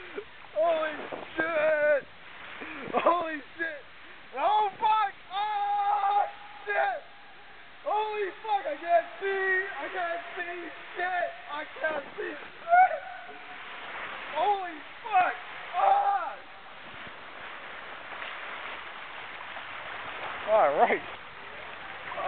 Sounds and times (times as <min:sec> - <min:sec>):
Speech: 0:00.6 - 0:02.0, 0:03.0 - 0:03.8, 0:04.4 - 0:07.0, 0:07.9 - 0:12.5, 0:14.4 - 0:16.4, 0:20.5 - 0:21.1.